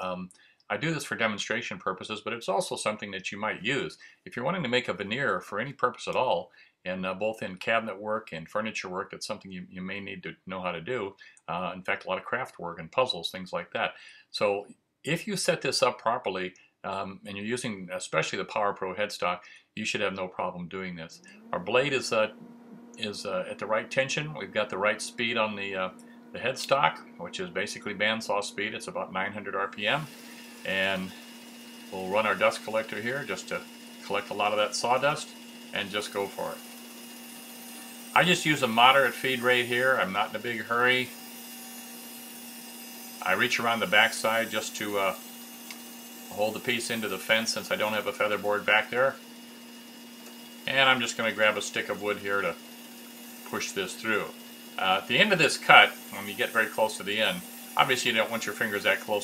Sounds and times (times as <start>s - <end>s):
Speech: 0.0s - 22.4s, 23.0s - 31.2s, 31.9s - 36.6s, 38.1s - 41.1s, 43.2s - 45.2s, 46.3s - 49.2s, 50.7s - 52.6s, 53.4s - 59.2s.